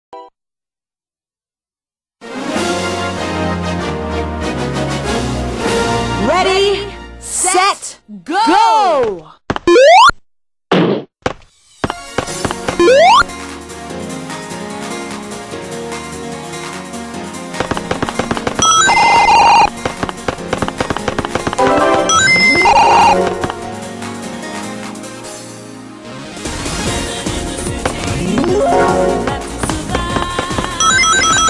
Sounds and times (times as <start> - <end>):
Music: 2.2 - 8.2, 11.7 - 31.4
Speech: 6.2 - 9.4.